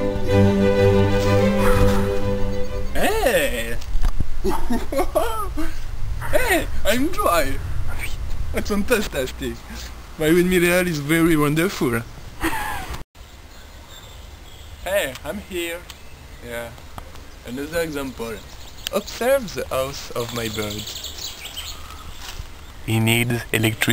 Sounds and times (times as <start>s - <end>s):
Bird vocalization, bird call, bird song: 13.2s - 19.5s, 20.1s - 23.0s.